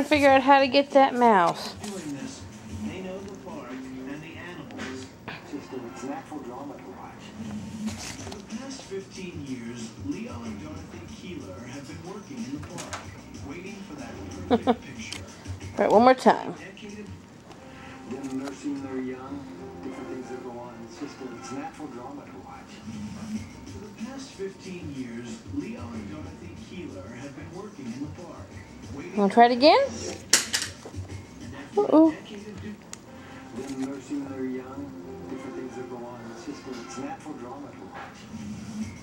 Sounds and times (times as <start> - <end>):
Music: 0.0 - 39.0.